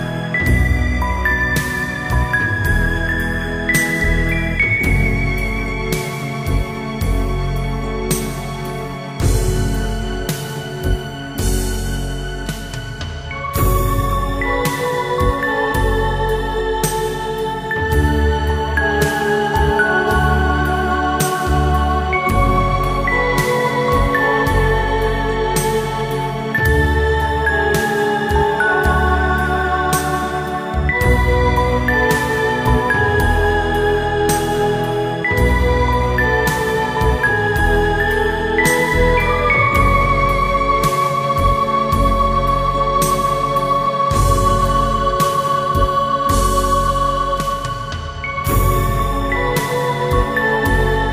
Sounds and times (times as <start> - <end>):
Background music: 0.0 - 51.1.